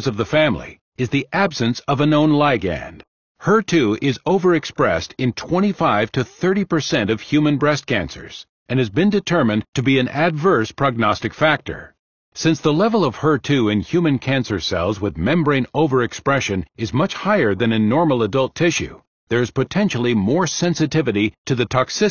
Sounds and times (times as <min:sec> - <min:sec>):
Speech: 0:00.0 - 0:22.1.